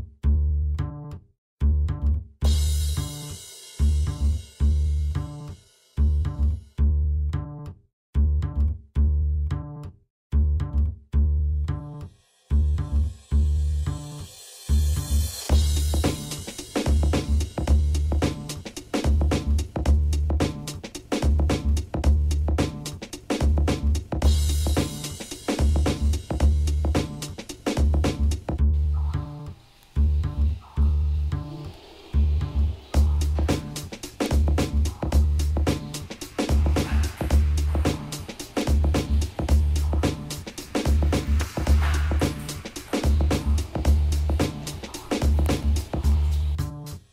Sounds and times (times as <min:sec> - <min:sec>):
Music: 0:00.2 - 0:47.1.